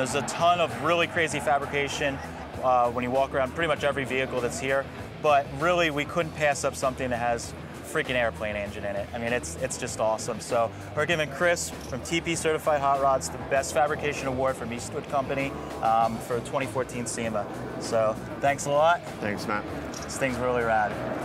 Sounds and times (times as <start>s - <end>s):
Speech: 0.0s - 21.0s
Music: 0.0s - 21.2s.